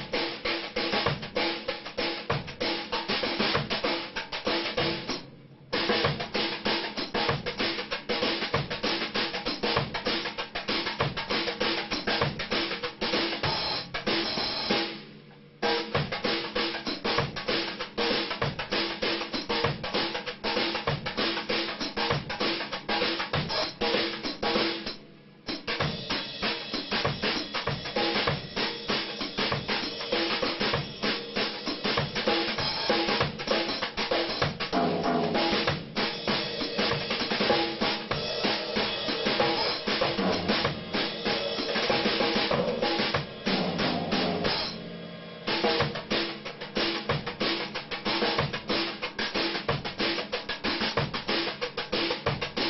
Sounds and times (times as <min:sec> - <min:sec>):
Percussion: 0:00.0 - 0:05.2, 0:15.6 - 0:44.8, 0:45.5 - 0:52.6.